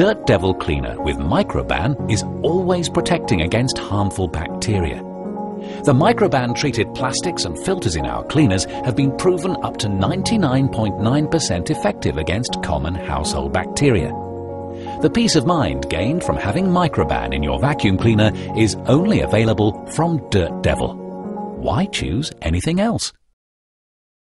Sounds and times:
Speech: 0.0s - 5.0s, 5.8s - 14.1s, 15.0s - 21.0s, 21.6s - 23.2s
Music: 0.0s - 23.4s.

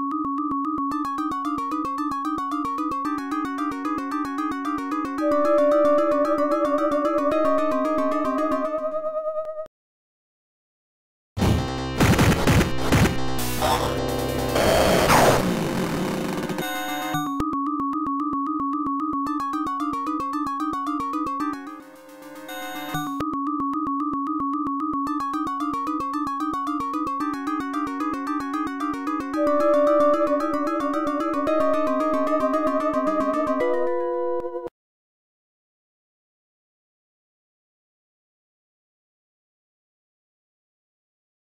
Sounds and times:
Music: 0.0s - 9.7s, 11.4s - 34.7s.

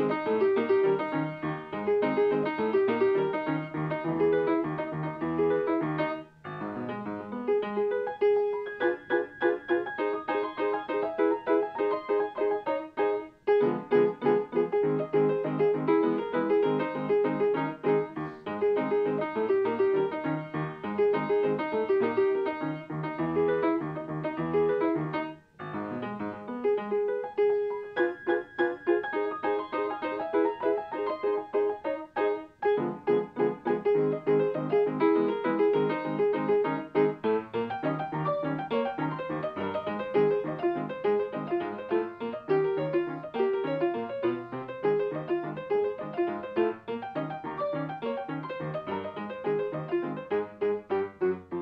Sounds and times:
Music: 0.0s - 51.6s.

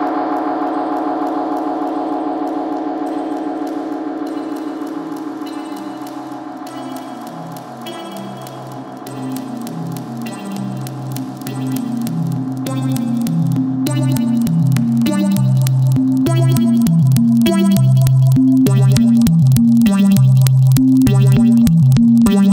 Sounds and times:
Crackle: 0.0s - 22.5s
Music: 0.0s - 22.5s.

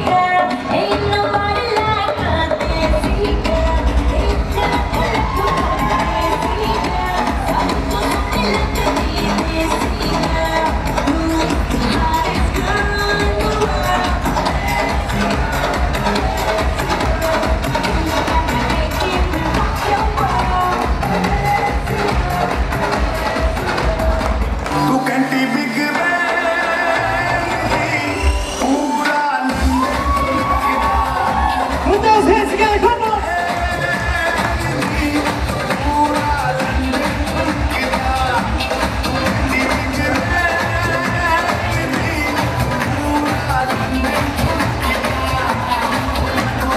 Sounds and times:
Music: 0.0s - 46.7s
Cheering: 4.6s - 8.8s, 13.4s - 17.5s, 25.8s - 46.7s.

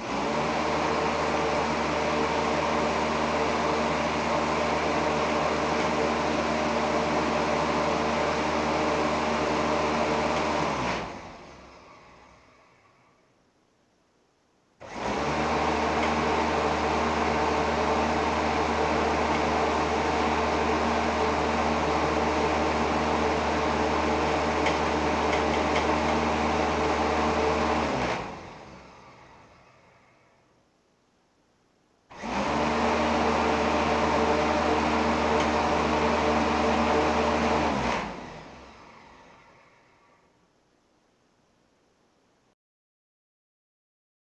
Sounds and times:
Mechanical fan: 0.0s - 13.5s, 14.8s - 42.6s
Inside, small room: 0.0s - 42.6s.

